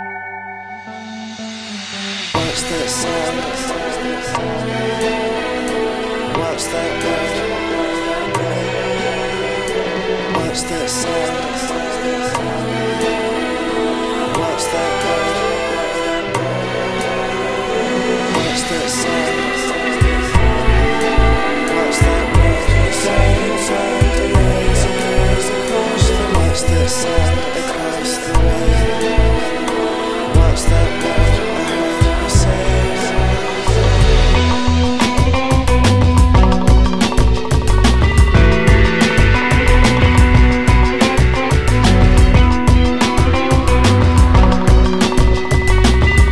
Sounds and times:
Music: 0.0s - 46.3s.

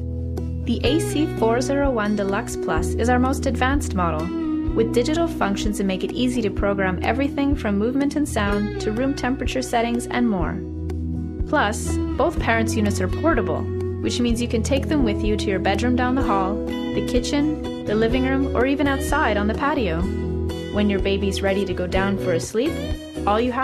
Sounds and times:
Music: 0.0s - 23.6s
Speech: 0.7s - 10.6s, 11.5s - 20.1s, 20.8s - 23.6s.

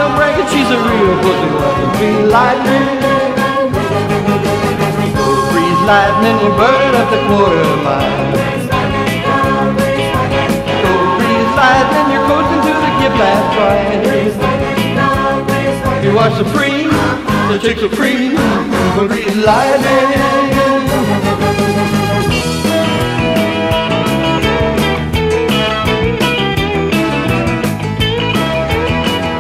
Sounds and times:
Rock and roll: 0.0s - 29.4s.

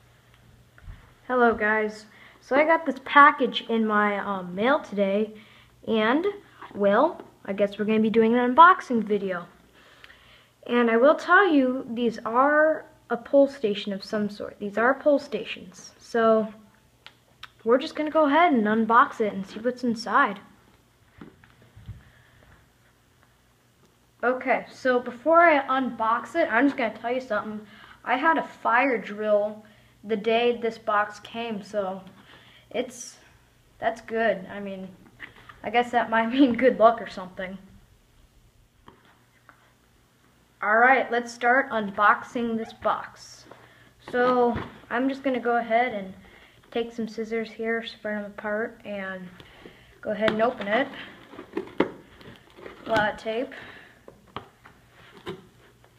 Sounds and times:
Speech: 1.3s - 9.6s, 10.6s - 16.6s, 17.5s - 20.6s, 24.2s - 35.0s, 35.6s - 37.8s, 40.6s - 49.4s, 50.0s - 51.1s, 52.8s - 53.6s.

